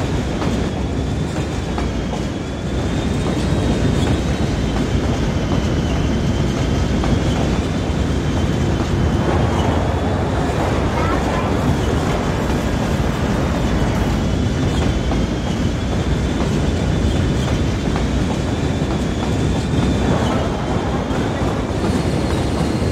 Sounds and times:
Train: 0:00.0 - 0:22.9
Speech: 0:10.8 - 0:11.8.

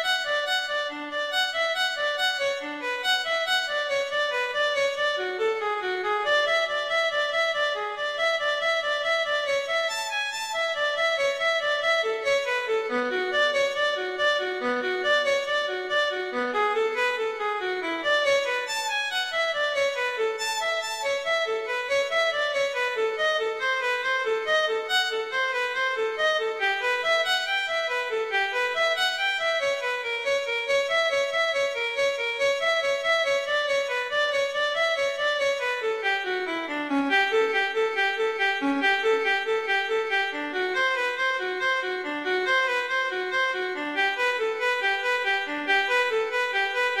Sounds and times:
Violin, fiddle: 0:00.0 - 0:47.0.

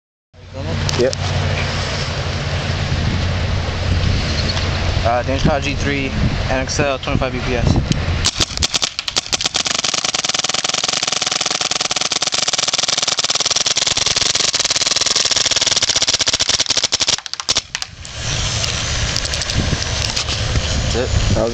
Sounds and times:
Speech: 0:05.0 - 0:07.8, 0:20.9 - 0:21.5.

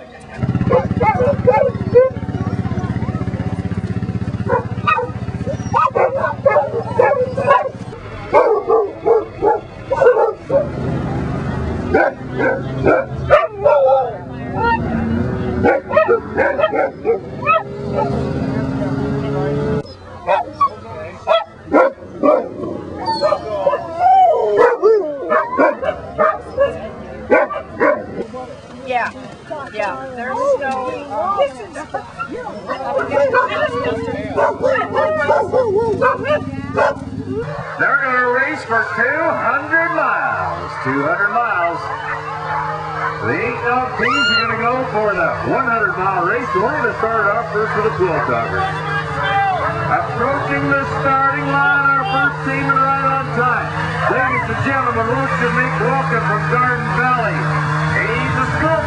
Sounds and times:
Bow-wow: 0:00.6 - 0:02.2, 0:04.4 - 0:10.8, 0:11.9 - 0:14.8, 0:15.6 - 0:18.2, 0:20.3 - 0:28.2, 0:31.3 - 0:37.7
Yip: 0:00.7 - 0:02.2, 0:04.5 - 0:07.8, 0:15.7 - 0:18.1, 0:19.9 - 0:23.9, 0:24.6 - 0:28.0, 0:34.4 - 0:37.0
Whimper (dog): 0:05.0 - 0:07.7, 0:19.8 - 0:21.5, 0:23.0 - 0:26.9, 0:31.3 - 0:37.5, 0:44.0 - 0:44.5.

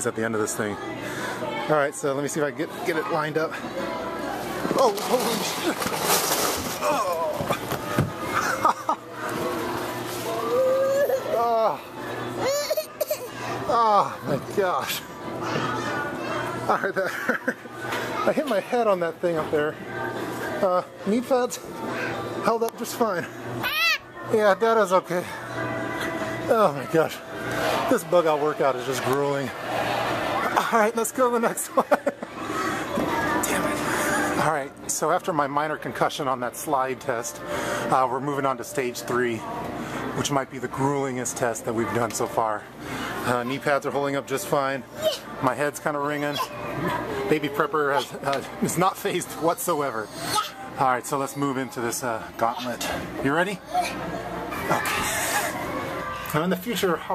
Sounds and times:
Inside, large room or hall: 0:02.7 - 0:18.7, 0:25.2 - 0:31.0, 0:31.7 - 0:35.2, 0:52.8 - 0:57.1
Music: 0:25.0 - 0:28.0.

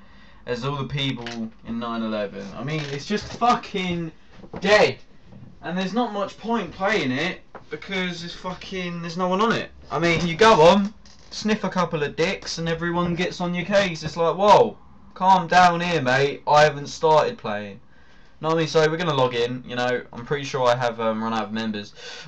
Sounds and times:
Speech: 0:00.5 - 0:05.0, 0:05.6 - 0:17.8, 0:18.4 - 0:22.0.

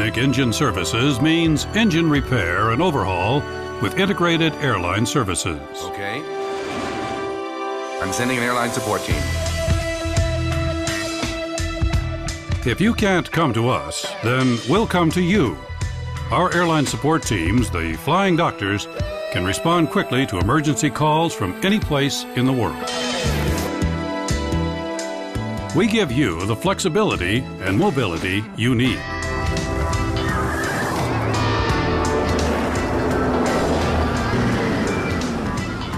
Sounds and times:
Speech: 0:00.0 - 0:06.2, 0:08.0 - 0:09.3, 0:12.6 - 0:15.6, 0:16.3 - 0:22.8, 0:25.7 - 0:29.0
Music: 0:00.0 - 0:35.9.

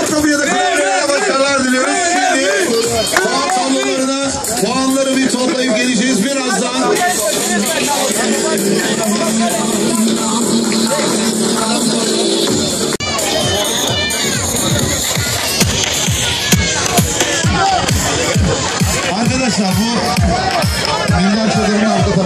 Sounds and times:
Speech: 0:00.0 - 0:12.3, 0:13.0 - 0:22.2
Music: 0:00.0 - 0:22.2.

